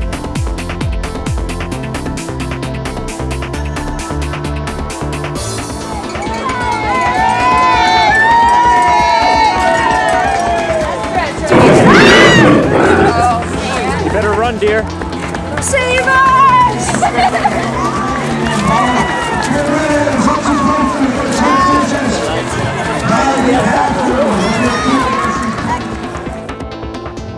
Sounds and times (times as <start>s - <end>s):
Music: 0.0s - 27.3s
Run: 5.0s - 27.3s.